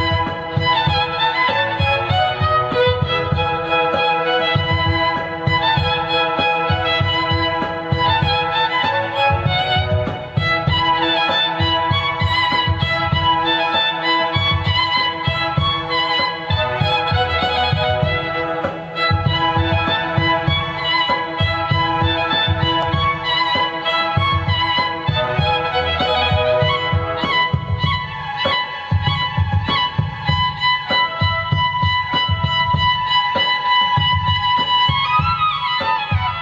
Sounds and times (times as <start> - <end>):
Violin, fiddle: 0.0 - 36.4.